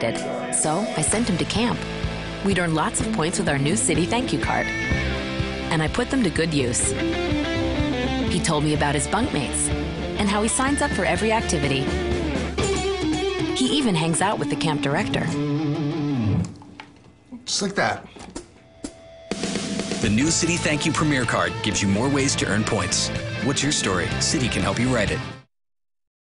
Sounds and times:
Rock and roll: 3.5 - 5.7, 9.3 - 13.9, 14.5 - 16.5, 19.3 - 25.5
Speech: 13.6 - 15.4, 20.0 - 25.3.

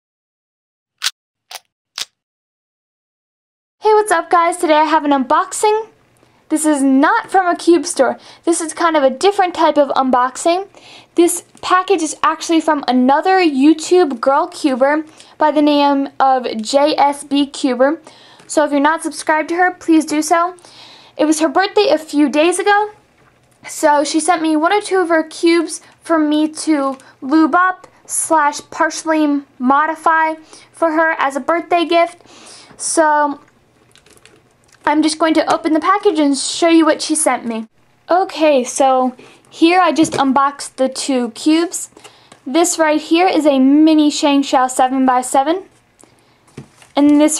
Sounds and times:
Speech: 3.8 - 20.6, 21.2 - 23.0, 23.6 - 32.2, 32.8 - 33.5, 34.8 - 45.7, 47.0 - 47.3.

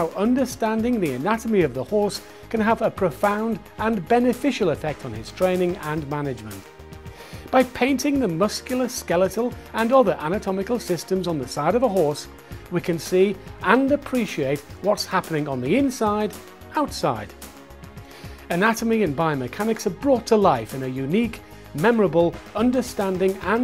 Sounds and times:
Speech: 0.0 - 6.6, 7.5 - 17.3, 18.5 - 23.6
Music: 0.0 - 23.6.

